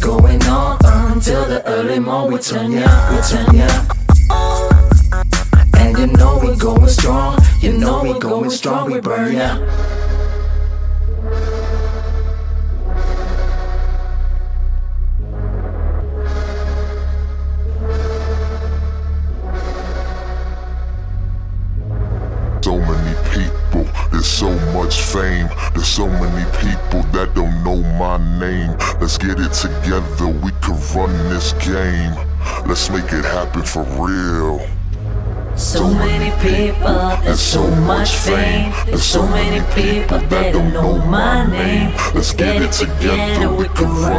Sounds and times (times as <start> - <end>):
Music: 0.0 - 44.1
Speech: 7.6 - 9.7, 22.6 - 34.8, 35.6 - 44.1.